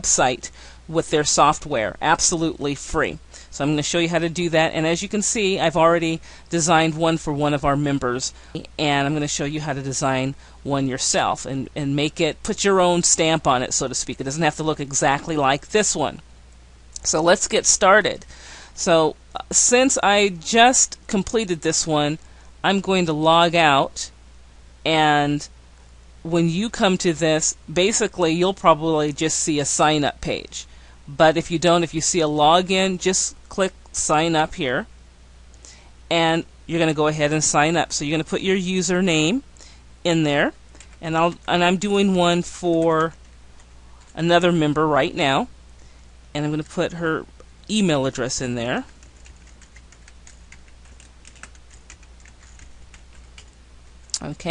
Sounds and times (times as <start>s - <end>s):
Speech: 0.0s - 16.2s, 17.0s - 24.2s, 24.9s - 25.5s, 26.3s - 34.9s, 36.1s - 39.5s, 40.1s - 43.2s, 44.2s - 45.5s, 46.4s - 48.9s, 54.2s - 54.5s.